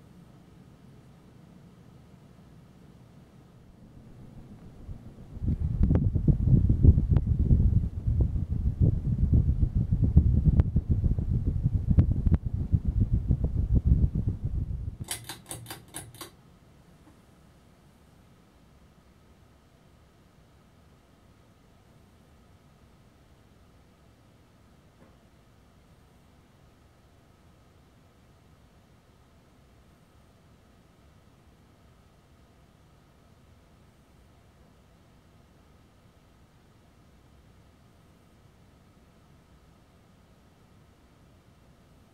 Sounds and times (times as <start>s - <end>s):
Silence: 0.0s - 15.2s
Inside, small room: 0.0s - 42.1s.